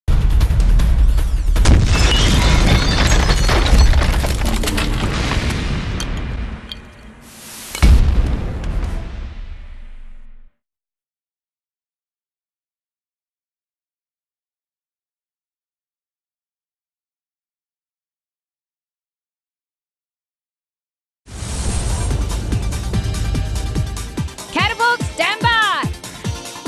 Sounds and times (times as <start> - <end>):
Music: 0.1 - 2.1, 21.3 - 26.6.